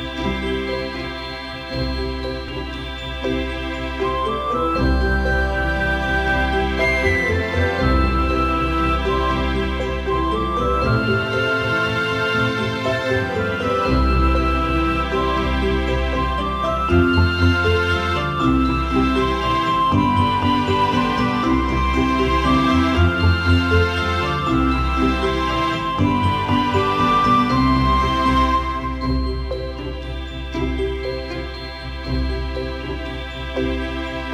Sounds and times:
Tender music: 0.0 - 34.3
Theme music: 0.0 - 34.3.

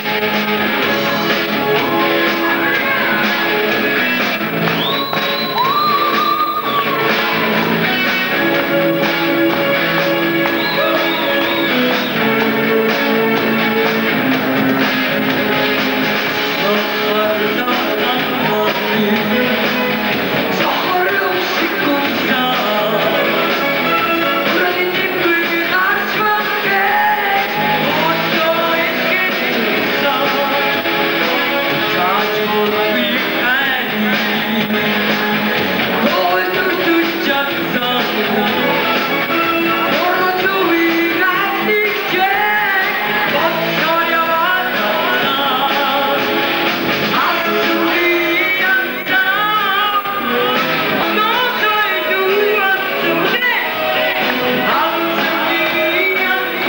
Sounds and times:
Soundtrack music: 0.0 - 48.8
Exciting music: 0.0 - 49.1.

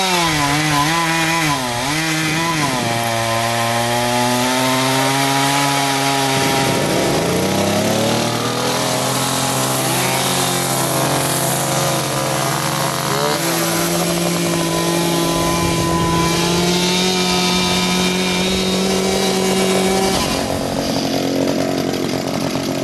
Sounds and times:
Chainsaw: 0.0 - 22.8.

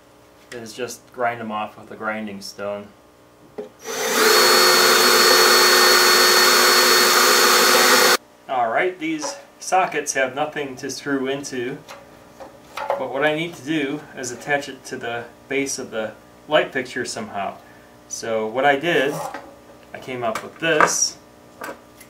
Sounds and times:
Speech: 0.5 - 3.0, 8.5 - 11.9, 12.9 - 21.2
Drill: 3.8 - 8.2.

